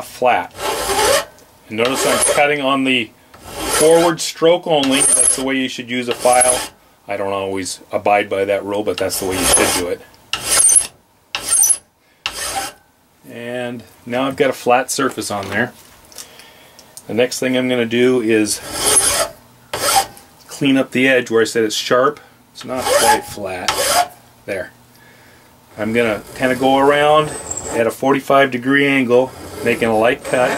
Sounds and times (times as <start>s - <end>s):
Filing (rasp): 0.5s - 2.5s, 3.4s - 4.1s, 4.8s - 5.5s, 6.1s - 6.8s, 9.2s - 12.8s, 18.6s - 20.1s, 22.7s - 24.1s, 25.8s - 27.9s, 29.1s - 30.5s.